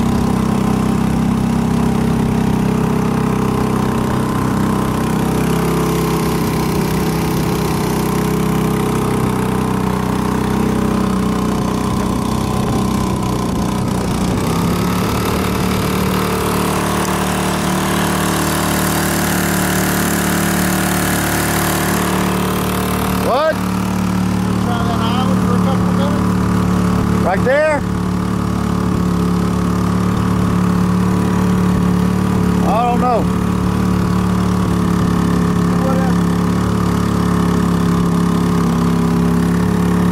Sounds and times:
Boat, Water vehicle: 0.0 - 40.1
Speech: 24.7 - 26.2, 27.2 - 27.9, 32.6 - 33.3, 35.8 - 36.2.

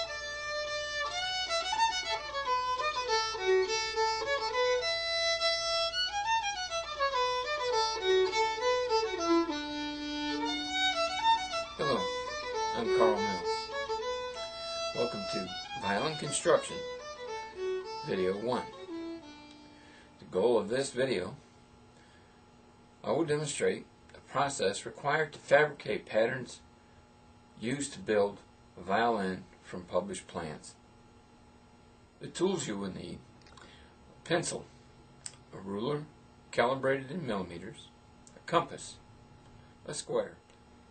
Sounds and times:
Violin, fiddle: 0.0 - 19.4
Speech: 11.8 - 12.1, 12.8 - 13.5, 15.0 - 16.8, 18.0 - 18.8, 20.2 - 21.4, 23.0 - 26.7, 27.6 - 30.8, 32.2 - 33.3, 34.2 - 34.7, 35.5 - 39.0, 39.8 - 40.4.

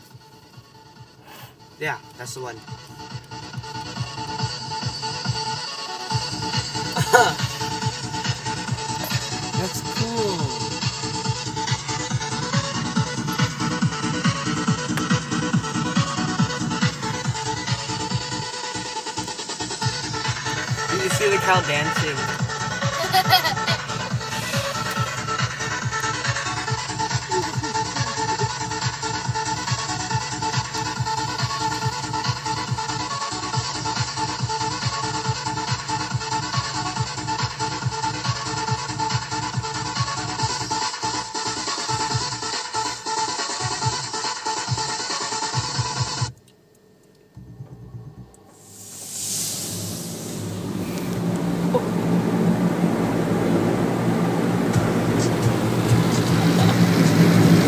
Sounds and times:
Music: 0.0 - 57.6.

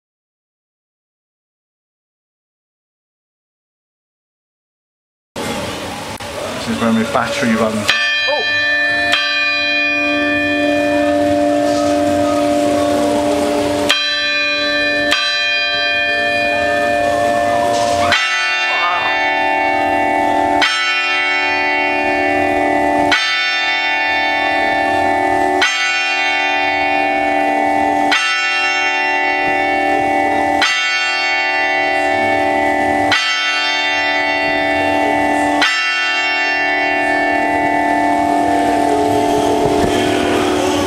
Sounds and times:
Speech: 6.4 - 8.5, 18.0 - 19.2
Church bell: 6.6 - 40.8.

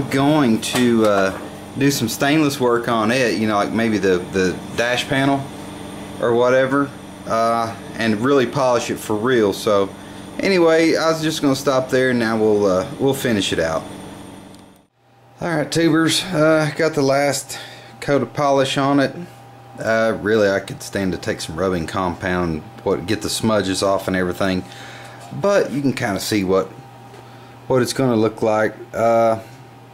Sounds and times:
Speech: 0.0 - 5.5, 6.2 - 13.9, 15.4 - 24.7, 25.3 - 26.8, 27.7 - 29.5.

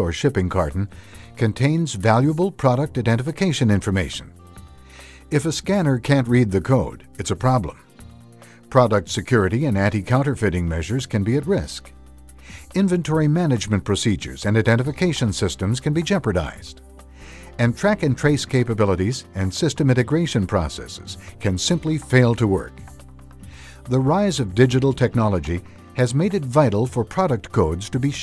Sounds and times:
Speech: 0.0 - 4.3, 5.3 - 7.8, 8.7 - 11.9, 12.7 - 16.7, 17.6 - 22.8, 23.9 - 28.2
Music: 0.0 - 28.2.

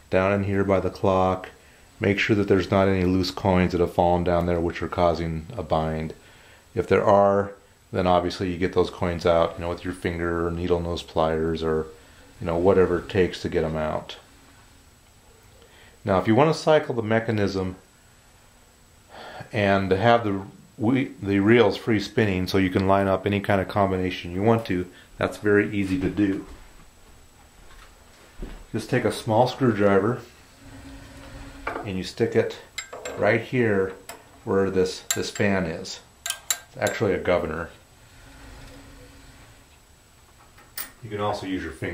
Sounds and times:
Inside, small room: 0.0 - 41.9
Speech: 0.1 - 6.2, 6.8 - 14.3, 16.0 - 17.8, 19.4 - 26.6, 28.7 - 30.3, 31.8 - 36.1, 36.7 - 37.8, 41.0 - 41.9.

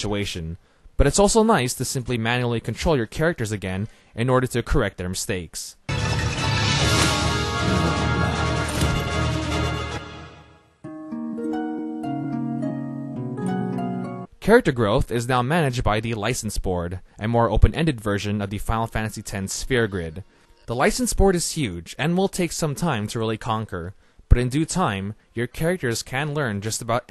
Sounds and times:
Speech: 0.0 - 5.8, 14.4 - 27.1.

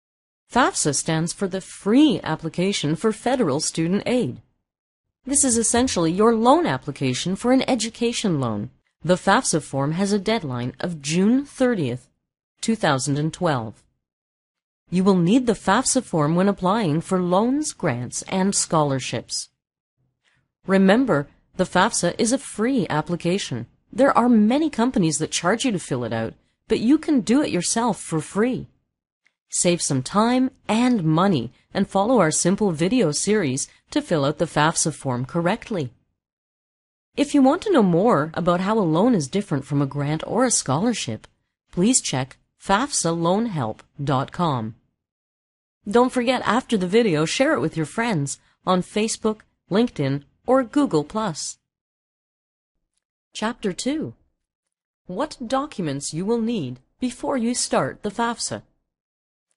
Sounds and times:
Speech: 0.5 - 4.4, 5.3 - 13.8, 14.9 - 19.5, 20.7 - 28.7, 29.5 - 36.0, 37.2 - 44.8, 45.9 - 51.6, 53.4 - 54.2, 55.1 - 58.7.

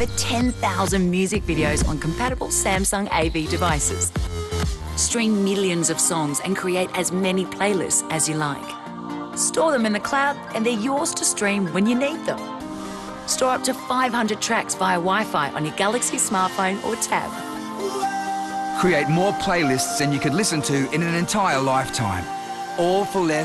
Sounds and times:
Music: 0.0 - 23.4.

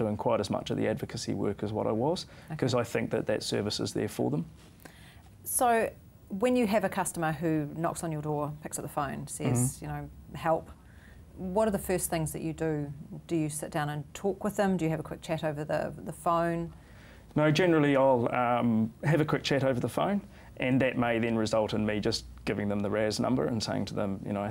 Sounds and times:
Inside, small room: 0.0 - 24.5
Speech: 9.3 - 10.0.

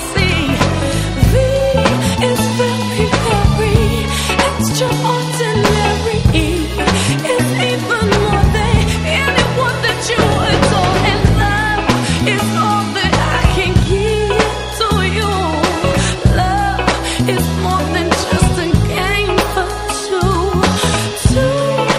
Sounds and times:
Soul music: 0.0 - 21.9.

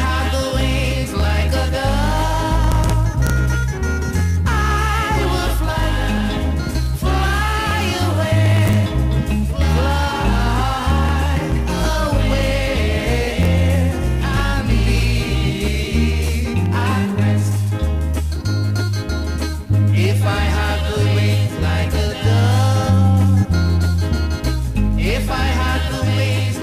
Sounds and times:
Music: 0.0 - 26.6.

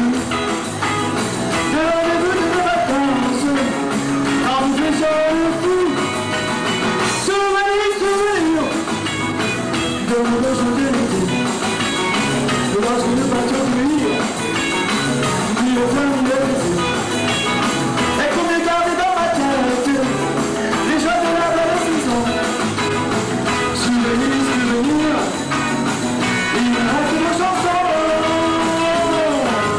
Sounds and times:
Rock and roll: 0.0 - 29.7.

